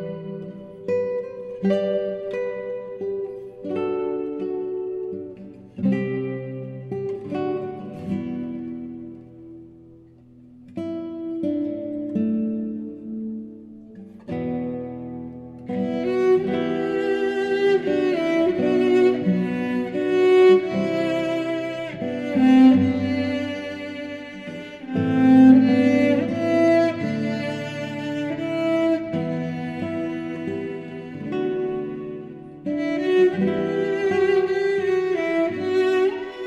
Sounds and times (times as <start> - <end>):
Acoustic guitar: 0.0 - 36.4.